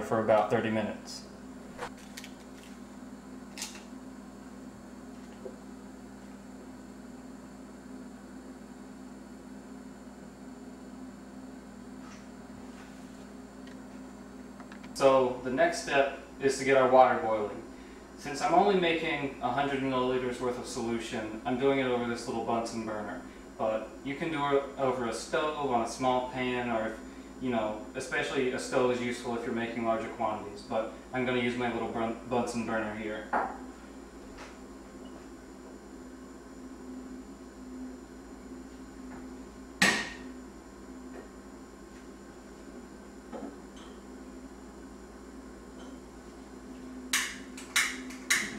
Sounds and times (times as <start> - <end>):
Speech: 0.0 - 1.3, 15.0 - 33.4.